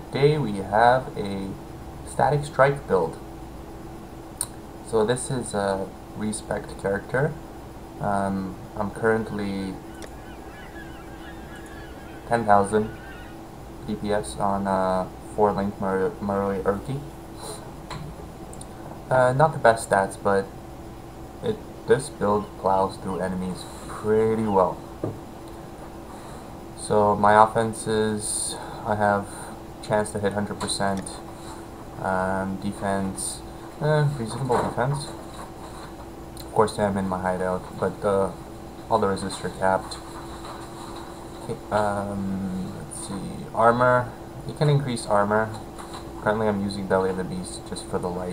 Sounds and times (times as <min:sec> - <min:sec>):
Speech: 0:00.0 - 0:03.3, 0:04.8 - 0:07.4, 0:08.0 - 0:10.1, 0:11.3 - 0:13.2, 0:13.9 - 0:17.6, 0:19.1 - 0:20.5, 0:21.4 - 0:24.8, 0:26.8 - 0:31.3, 0:32.0 - 0:35.2, 0:36.4 - 0:40.1, 0:41.4 - 0:45.6, 0:46.2 - 0:48.3.